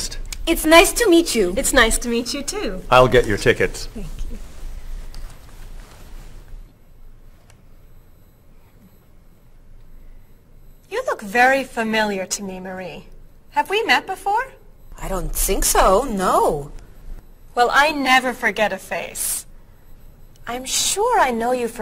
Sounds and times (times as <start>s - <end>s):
Conversation: 0.0s - 21.8s.